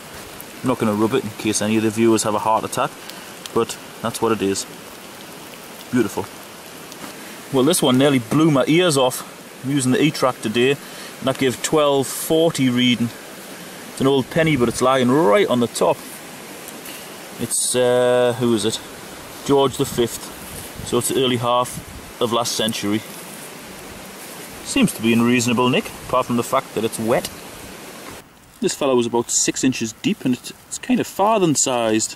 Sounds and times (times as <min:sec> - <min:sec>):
Outside, rural or natural: 0:00.0 - 0:32.1
Rain: 0:00.0 - 0:32.1
Speech: 0:00.6 - 0:02.9, 0:03.5 - 0:04.7, 0:05.9 - 0:06.3, 0:07.5 - 0:13.2, 0:14.0 - 0:16.0, 0:17.4 - 0:18.8, 0:19.4 - 0:23.1, 0:24.6 - 0:27.3, 0:28.6 - 0:32.1.